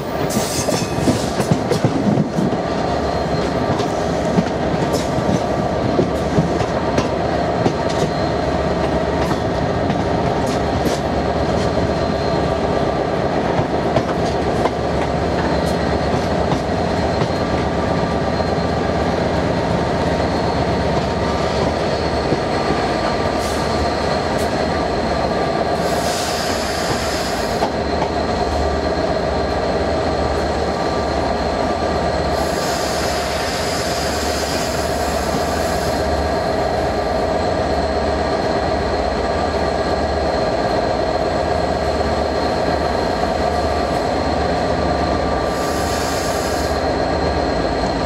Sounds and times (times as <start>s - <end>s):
Railroad car, train wagon: 0.0s - 48.0s
Subway, metro, underground: 0.0s - 48.0s
Train: 0.0s - 48.0s.